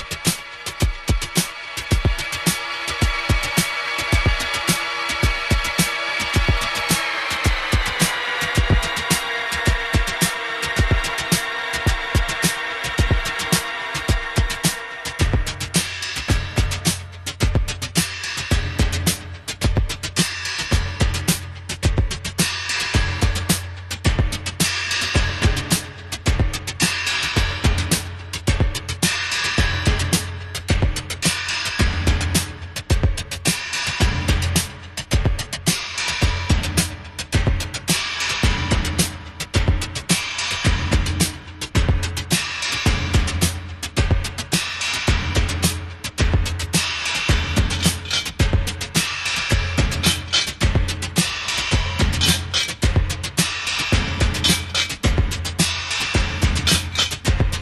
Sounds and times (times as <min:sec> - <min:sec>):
Music: 0:00.0 - 0:57.6.